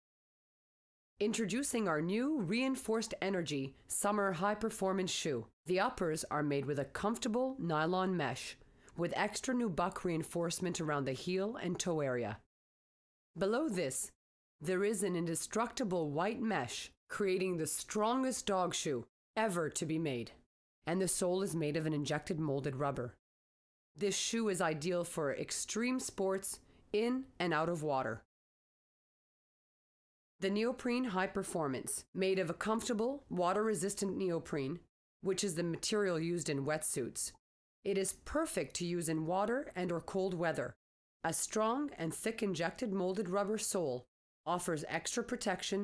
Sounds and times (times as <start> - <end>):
Speech: 1.2 - 12.4, 13.4 - 23.2, 24.0 - 28.2, 30.4 - 45.8.